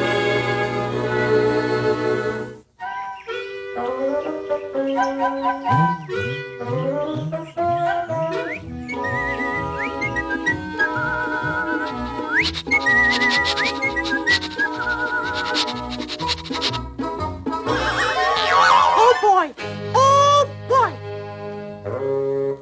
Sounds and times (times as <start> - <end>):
Music: 0.0 - 18.4, 19.0 - 22.6.